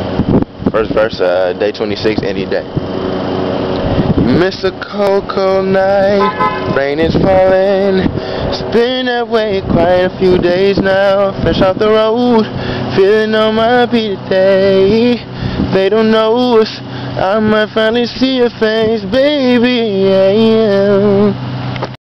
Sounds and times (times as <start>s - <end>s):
Male singing: 4.3s - 21.4s.